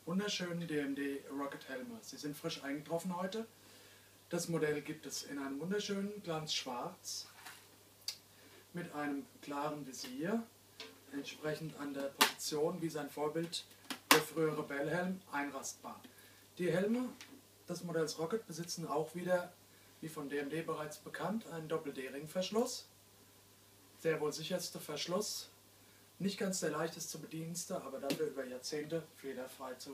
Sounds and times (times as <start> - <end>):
Speech: 0.1 - 3.5, 4.3 - 7.4, 8.8 - 10.5, 11.1 - 22.9, 24.0 - 25.6, 26.2 - 29.9.